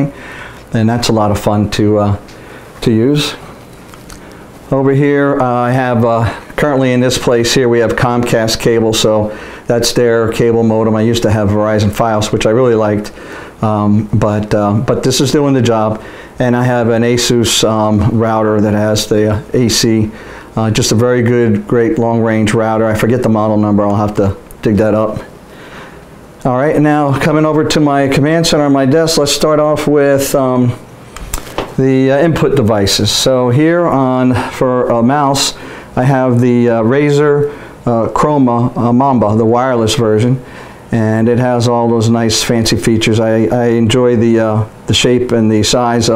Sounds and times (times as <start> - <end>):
Speech: 0.0 - 3.5, 4.7 - 25.3, 26.4 - 30.8, 31.8 - 46.1.